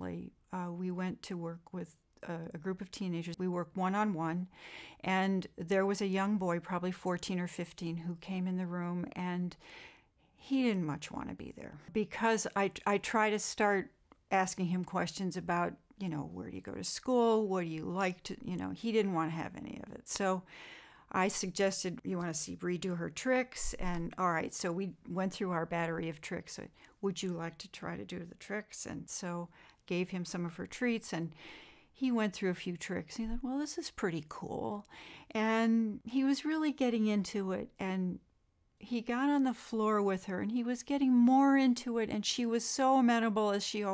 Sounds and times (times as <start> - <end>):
Speech: 0.0 - 9.6, 10.4 - 20.5, 21.1 - 31.4, 32.0 - 38.2, 38.8 - 43.9.